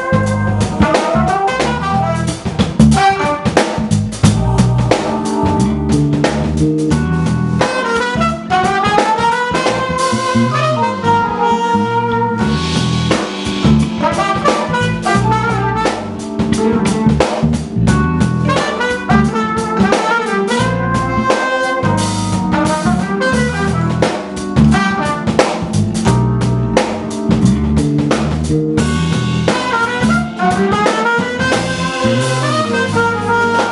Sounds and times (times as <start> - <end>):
Music: 0.0 - 33.7.